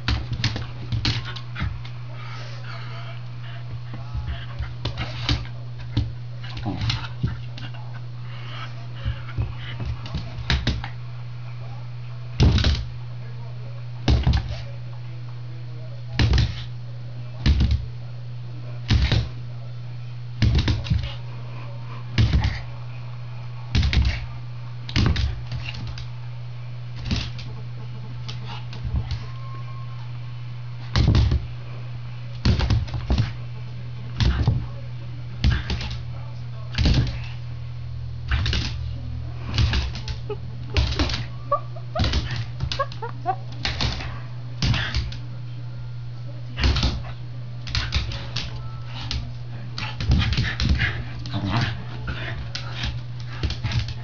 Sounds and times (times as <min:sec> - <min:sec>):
Speech: 0:02.1 - 0:24.6, 0:33.3 - 0:37.4, 0:38.3 - 0:42.5, 0:43.2 - 0:54.0.